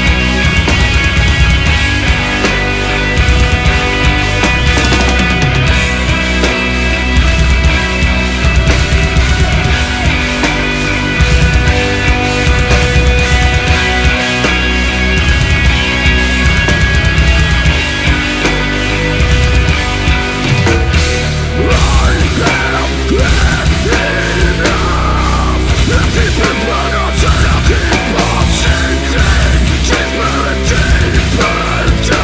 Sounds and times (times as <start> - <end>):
Music: 0.0 - 32.2.